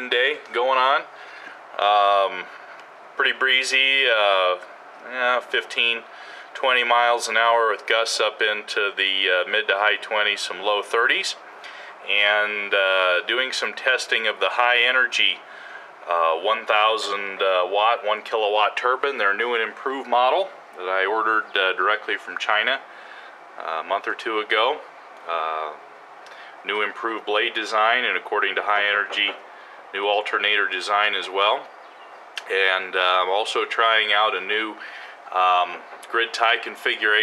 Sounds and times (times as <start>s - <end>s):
Speech: 0.0s - 1.1s, 1.8s - 2.6s, 3.2s - 11.4s, 12.0s - 22.9s, 23.6s - 25.8s, 26.6s - 29.4s, 30.0s - 31.7s, 32.4s - 37.2s.